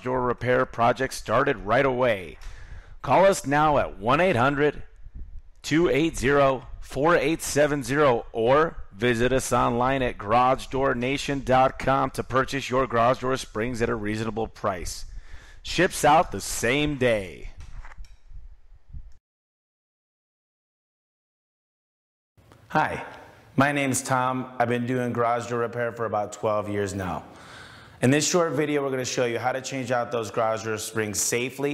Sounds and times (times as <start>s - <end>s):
Speech: 0.0s - 2.4s, 3.1s - 4.9s, 5.7s - 15.0s, 15.7s - 17.6s, 22.7s - 27.3s, 28.0s - 31.7s.